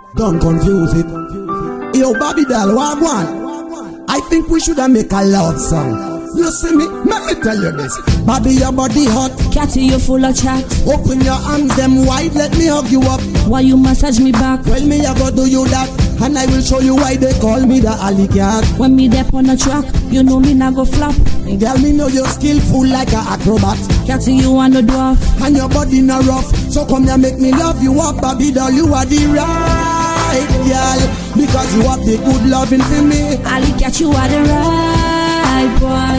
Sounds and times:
Exciting music: 7.0 - 13.9, 25.4 - 36.1.

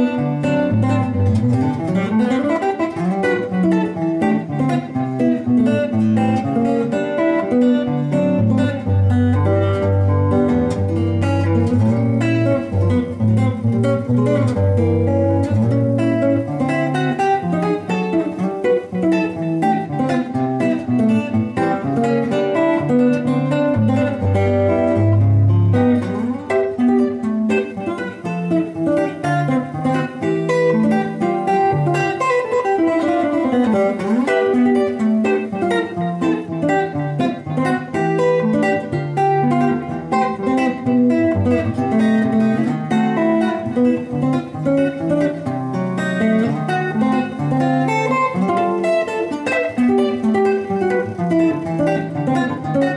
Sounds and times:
Strum: 0.0 - 52.9.

